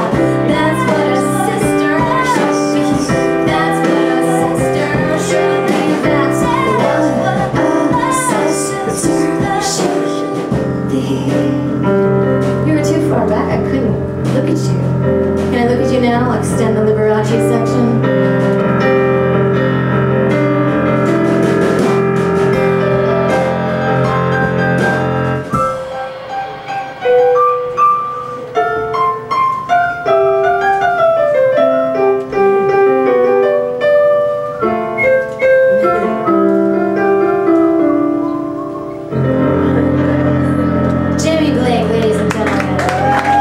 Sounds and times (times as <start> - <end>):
Inside, large room or hall: 0.0 - 43.4
Music: 0.0 - 43.4.